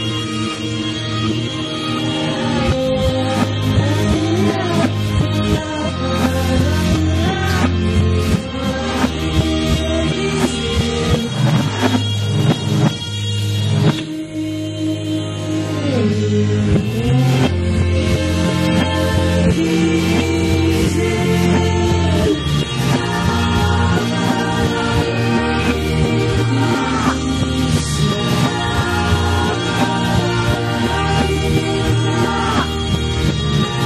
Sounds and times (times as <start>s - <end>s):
Music: 0.0s - 33.8s.